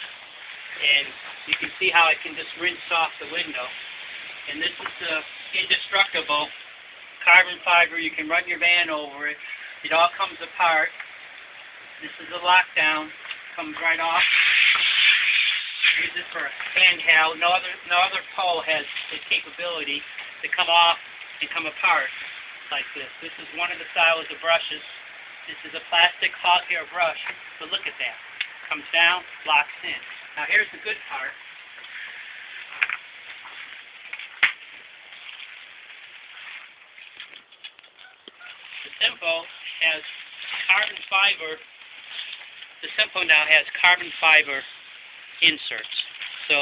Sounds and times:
Speech: 0.8s - 3.7s, 4.5s - 6.5s, 7.2s - 10.9s, 12.0s - 15.0s, 15.9s - 22.1s, 22.7s - 24.9s, 25.5s - 31.4s, 38.9s - 41.6s, 42.8s - 44.7s, 45.4s - 46.6s.

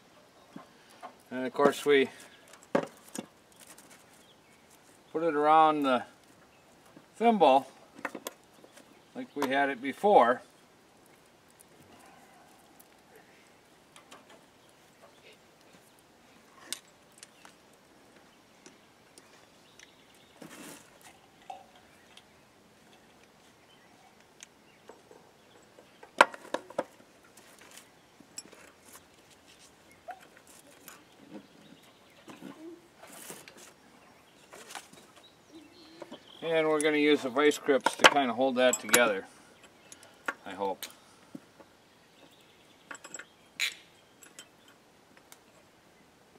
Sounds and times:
Outside, rural or natural: 0.0s - 46.3s.

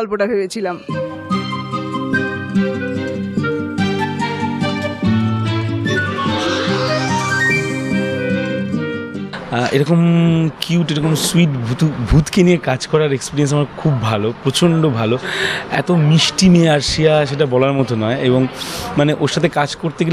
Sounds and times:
Music: 0.5s - 9.4s
Speech: 9.5s - 15.2s, 15.8s - 20.1s.

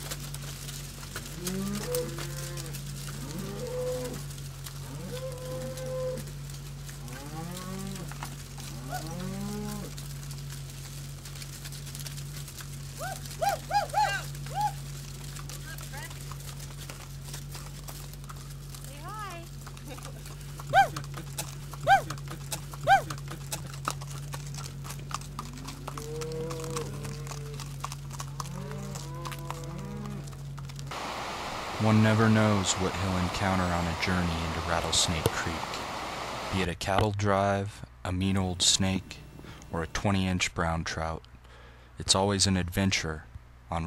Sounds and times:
Animal: 0.0s - 30.9s.

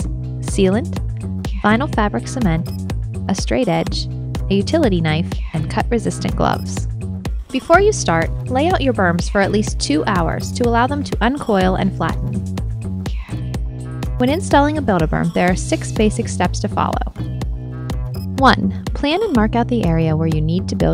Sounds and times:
Speech: 0.0s - 2.7s, 3.3s - 6.9s, 7.6s - 12.4s, 13.1s - 13.4s, 14.2s - 17.1s, 18.4s - 20.9s
Music: 0.0s - 20.9s.

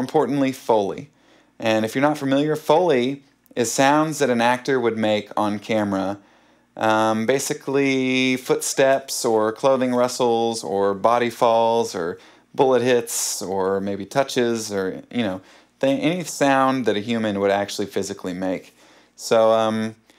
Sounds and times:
Speech: 0.0s - 6.2s, 6.8s - 20.0s.

